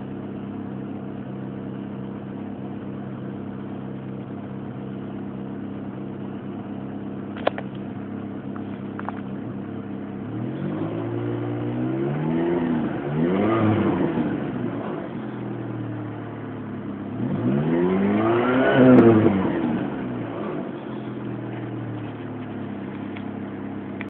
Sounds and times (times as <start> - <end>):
Car: 0.0 - 24.1
Accelerating, revving, vroom: 10.3 - 15.2, 17.1 - 20.8.